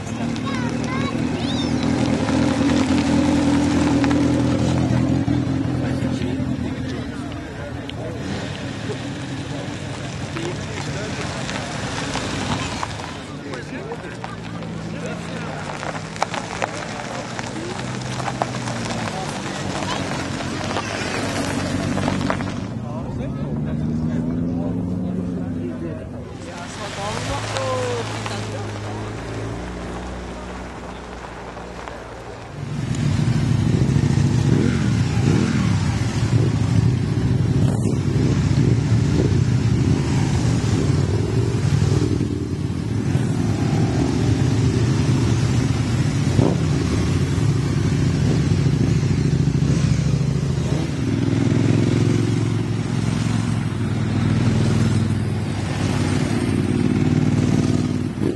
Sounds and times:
Speech: 0:00.0 - 0:02.0, 0:04.7 - 0:11.9, 0:13.2 - 0:18.0, 0:22.7 - 0:29.5
Car: 0:00.0 - 0:58.3.

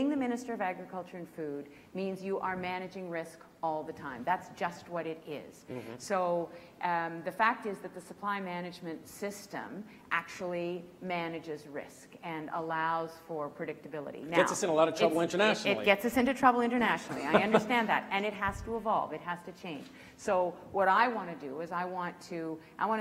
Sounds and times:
Female speech, woman speaking: 0:00.0 - 0:23.0.

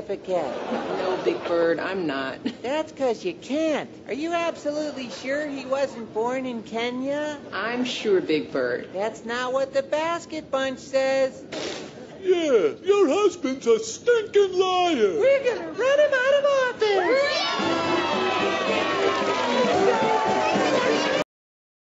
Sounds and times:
Music: 0:17.4 - 0:21.3.

